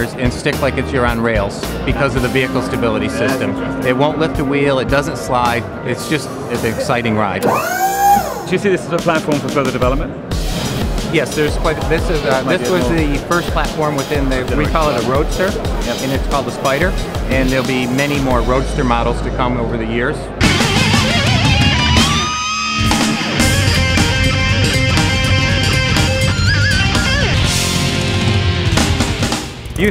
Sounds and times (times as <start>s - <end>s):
Heavy metal: 1.4s - 6.8s, 10.3s - 29.9s.